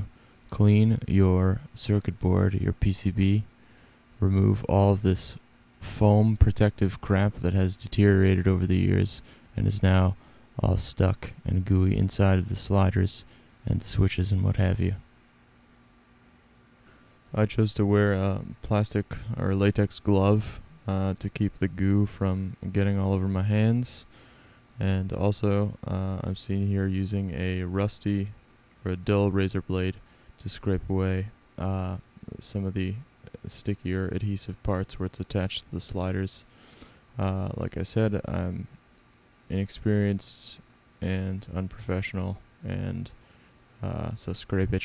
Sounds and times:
Speech: 0.0s - 3.5s, 4.2s - 15.1s, 17.3s - 24.1s, 24.8s - 36.5s, 37.2s - 38.8s, 39.5s - 43.2s, 43.8s - 44.8s.

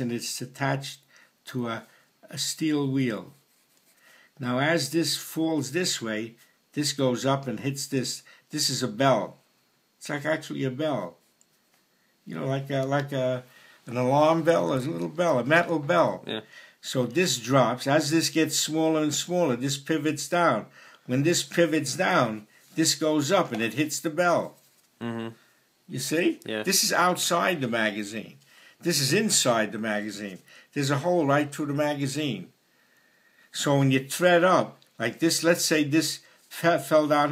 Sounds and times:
Speech: 0.0s - 3.4s, 4.4s - 9.4s, 10.0s - 11.2s, 12.3s - 32.6s, 33.5s - 37.3s.

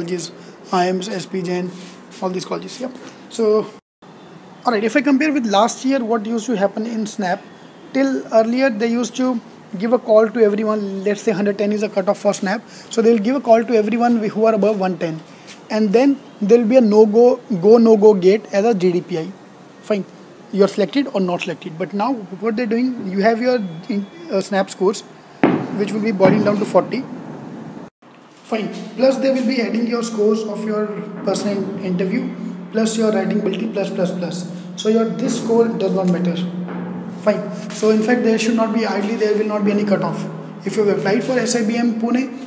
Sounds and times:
Speech: 0.0s - 3.8s, 4.6s - 25.1s, 25.8s - 27.1s, 28.5s - 36.6s, 37.2s - 42.4s.

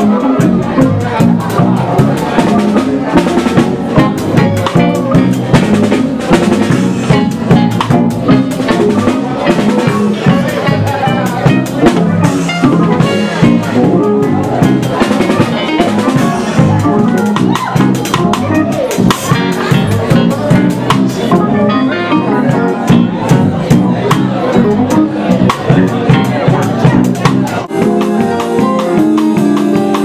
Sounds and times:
Music: 0.0s - 30.0s
Speech: 0.0s - 30.0s.

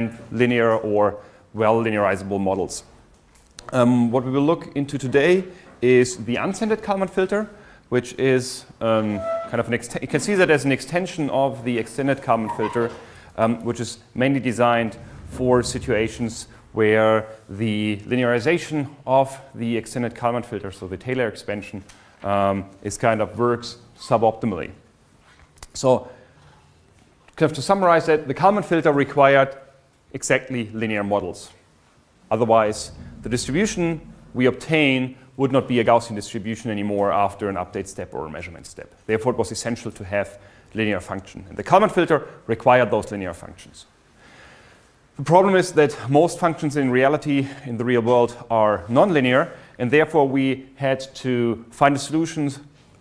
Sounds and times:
Speech: 0.0s - 3.0s, 3.6s - 24.9s, 25.6s - 26.2s, 27.4s - 31.6s, 32.3s - 44.0s, 45.2s - 52.7s.

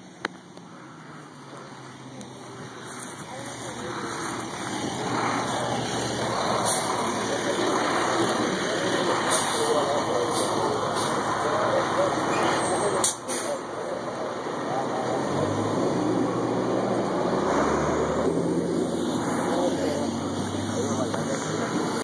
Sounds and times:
Bus: 0.0s - 22.0s
Speech: 2.2s - 4.4s, 6.5s - 15.6s, 19.3s - 22.0s.

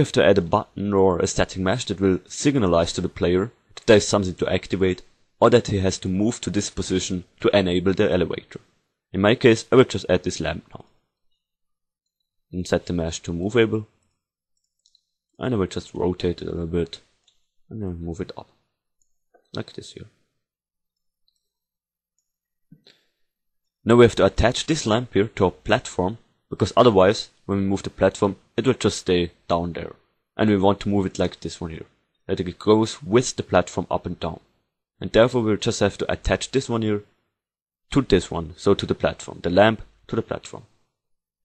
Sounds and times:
Speech: 0.0s - 10.9s, 12.5s - 13.9s, 15.4s - 17.1s, 17.7s - 18.6s, 19.5s - 20.2s, 23.8s - 37.1s, 37.9s - 40.8s.

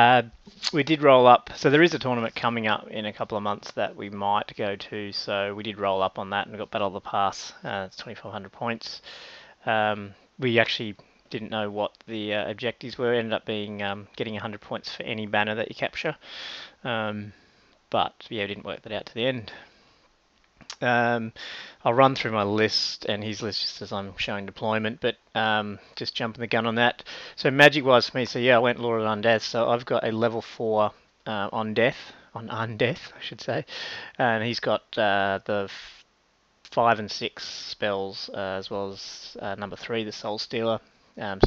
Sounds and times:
Speech: 0.0s - 9.0s, 9.6s - 16.2s, 16.8s - 19.6s, 20.7s - 36.0s, 36.7s - 41.4s.

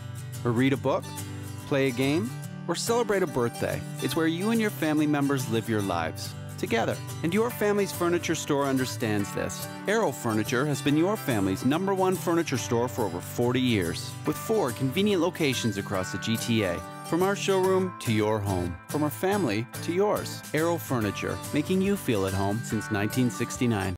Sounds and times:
Music: 0.0s - 23.9s
Speech: 0.4s - 1.1s, 1.7s - 23.9s.

